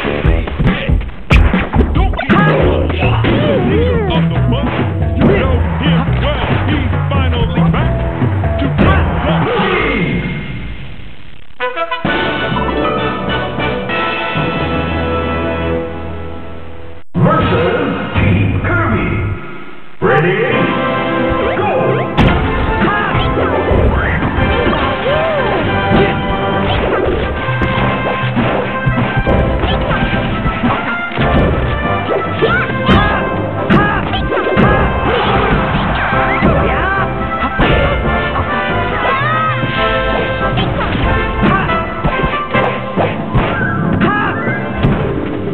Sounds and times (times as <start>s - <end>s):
Music: 0.0s - 10.8s, 11.6s - 45.5s.